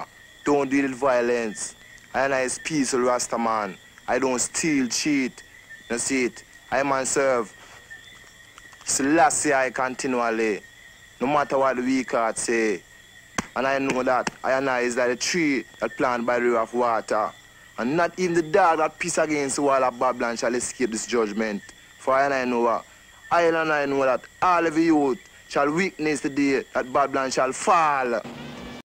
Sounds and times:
Male speech, man speaking: 0.0 - 7.5, 8.9 - 10.6, 11.2 - 12.8, 13.6 - 28.3
Narration, monologue: 0.0 - 28.8.

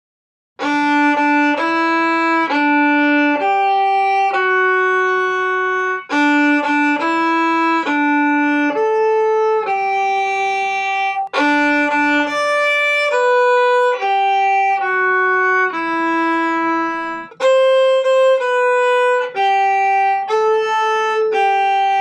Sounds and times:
Violin, fiddle: 0.6 - 22.0.

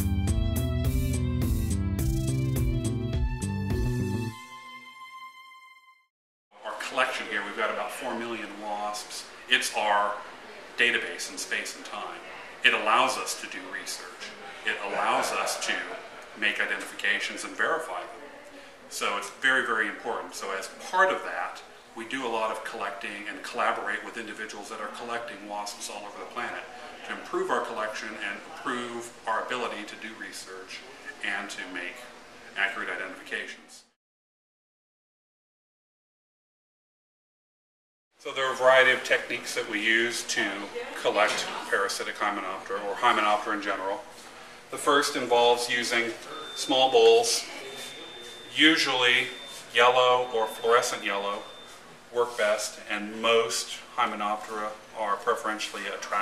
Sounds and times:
Speech: 6.6 - 34.0, 38.2 - 44.1, 44.7 - 56.2.

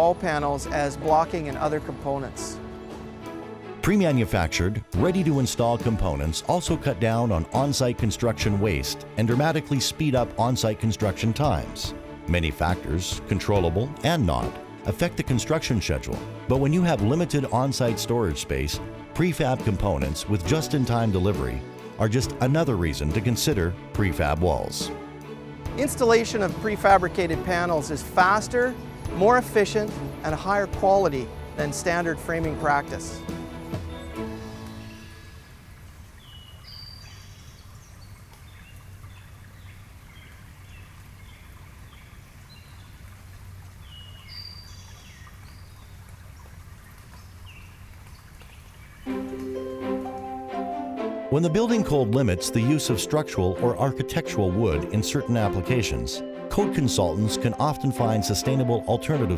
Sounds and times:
Speech: 0.0 - 2.6, 3.8 - 24.9, 25.8 - 33.2, 51.3 - 59.3
Music: 0.0 - 35.6, 49.0 - 59.3
Outside, rural or natural: 0.0 - 59.3.

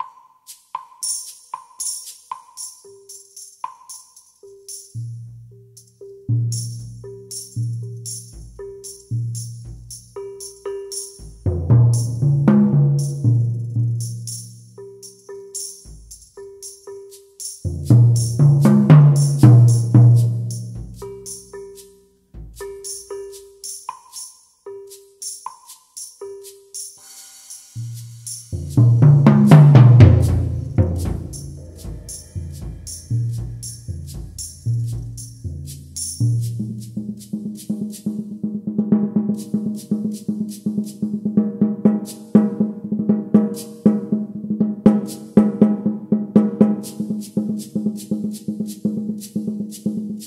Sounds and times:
Music: 0.0 - 50.2.

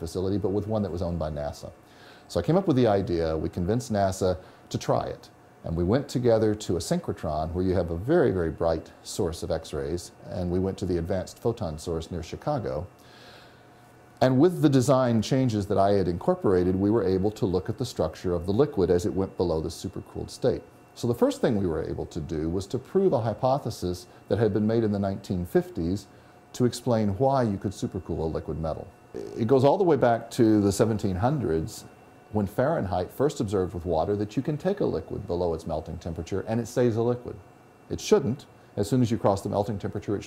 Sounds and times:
Speech: 0.0 - 13.0, 14.2 - 40.2.

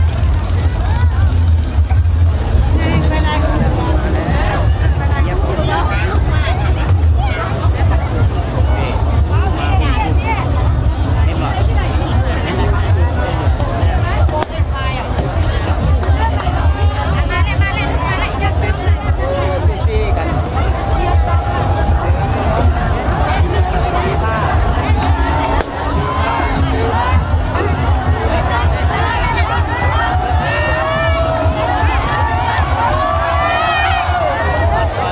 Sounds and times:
Motorboat, speedboat: 0.0 - 25.8
Speech: 0.0 - 35.1.

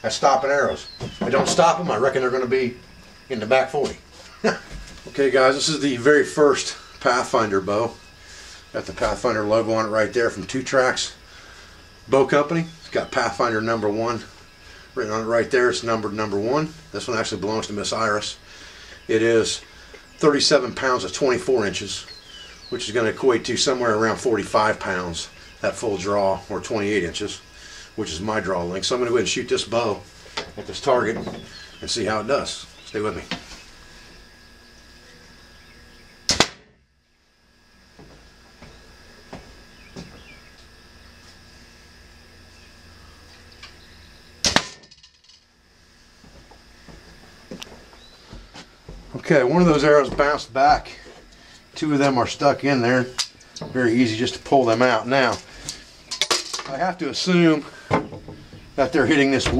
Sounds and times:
Arrow: 36.3 - 36.8, 44.4 - 44.9.

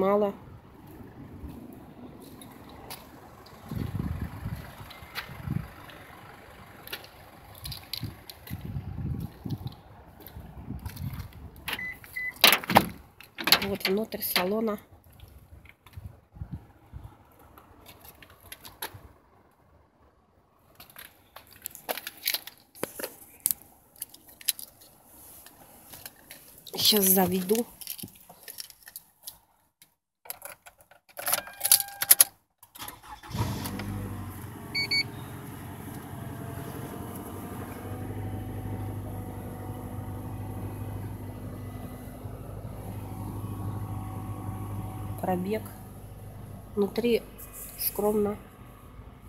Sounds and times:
Speech: 0.0 - 0.4, 13.6 - 14.9, 26.7 - 27.7, 45.2 - 45.8, 46.8 - 48.4.

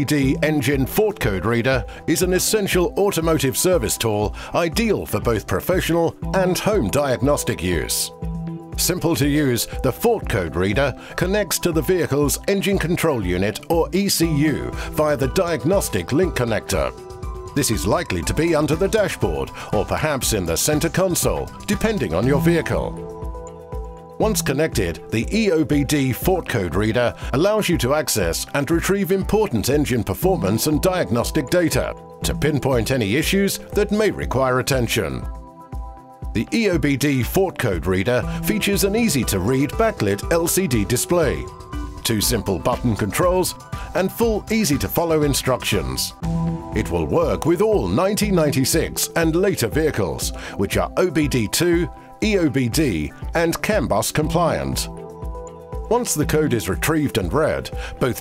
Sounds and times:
Speech: 0.0 - 8.1, 8.8 - 17.0, 17.6 - 23.0, 24.2 - 35.3, 36.4 - 46.2, 46.8 - 54.9, 55.9 - 58.2
Music: 0.0 - 58.2.

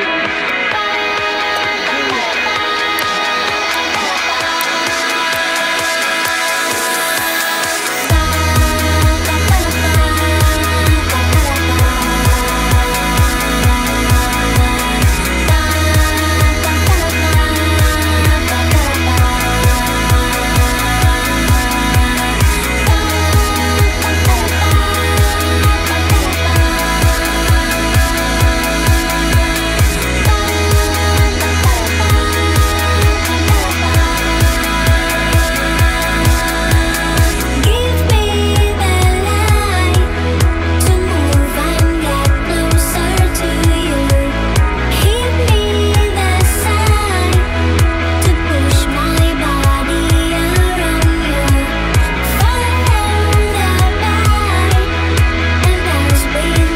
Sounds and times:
Music: 0.0 - 56.7.

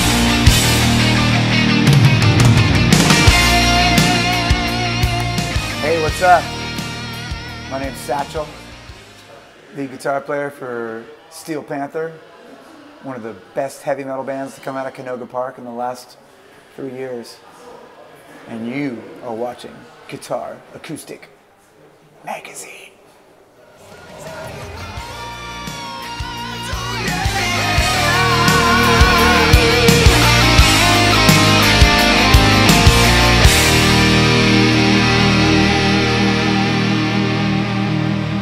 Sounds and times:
Speech: 9.7 - 16.2, 16.8 - 17.8, 18.4 - 21.3, 22.2 - 23.0.

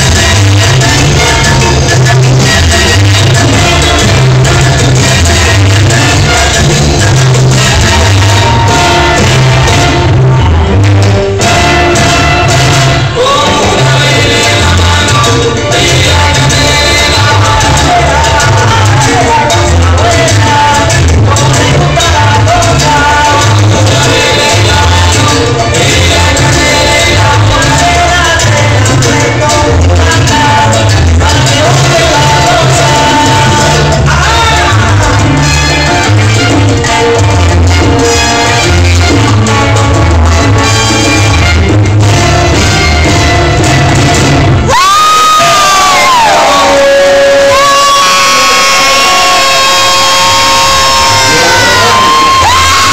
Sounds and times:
Crowd: 0.0 - 52.9
Inside, large room or hall: 0.0 - 52.9
Music: 0.0 - 52.9.

